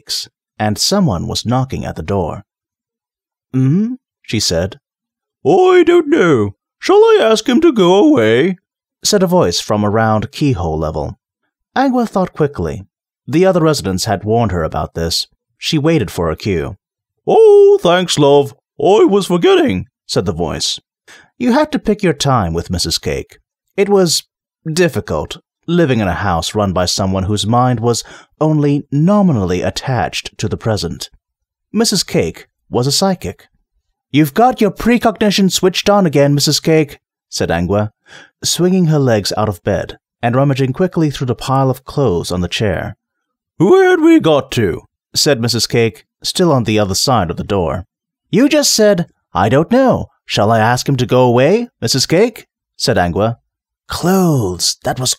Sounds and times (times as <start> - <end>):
Speech synthesizer: 0.0 - 2.5, 3.6 - 4.8, 5.5 - 11.2, 11.8 - 20.8, 21.4 - 31.1, 31.8 - 33.5, 34.2 - 43.0, 43.6 - 55.1
Narration, monologue: 0.0 - 55.1.